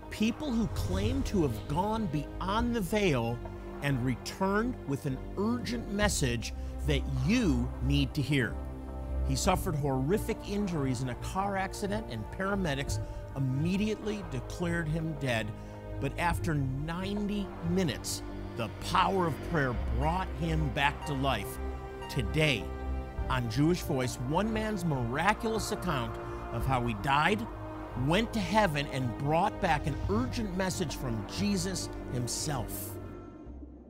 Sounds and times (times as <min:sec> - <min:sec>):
Music: 0:00.0 - 0:33.9
Speech: 0:00.1 - 0:08.6, 0:09.3 - 0:22.7, 0:23.3 - 0:33.0.